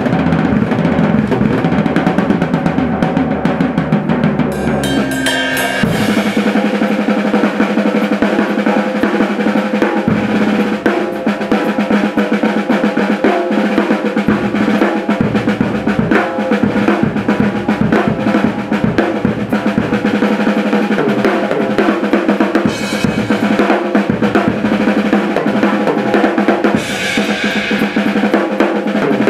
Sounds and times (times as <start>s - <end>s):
Drum kit: 0.0s - 29.2s.